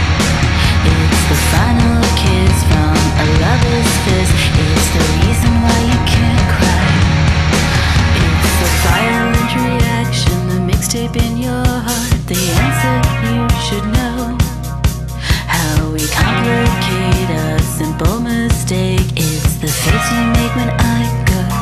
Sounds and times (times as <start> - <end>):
Music: 0.0 - 21.6.